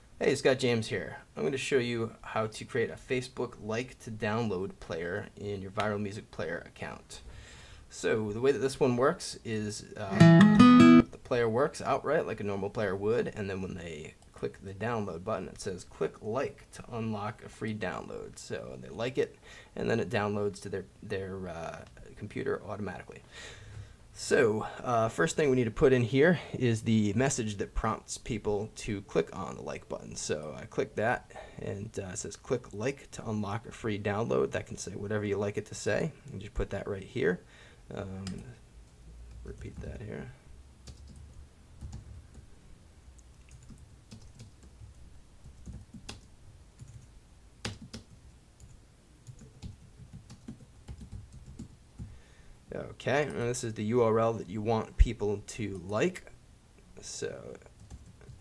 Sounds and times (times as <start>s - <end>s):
Speech: 0.2s - 7.3s, 7.9s - 10.2s, 11.1s - 23.2s, 24.2s - 38.6s, 39.4s - 40.4s, 52.7s - 56.4s, 57.0s - 57.8s.